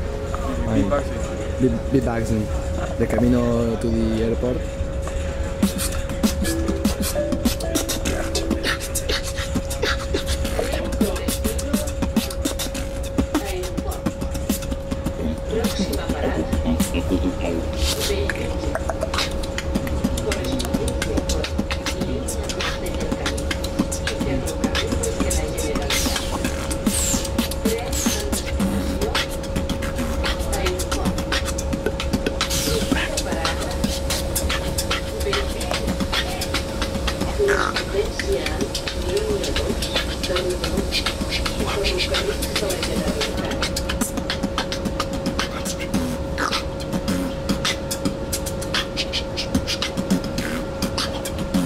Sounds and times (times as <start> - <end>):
Speech: 0.3 - 4.8, 10.5 - 12.0, 13.3 - 14.2, 15.1 - 18.9, 19.8 - 26.7, 27.6 - 31.7, 32.4 - 44.1.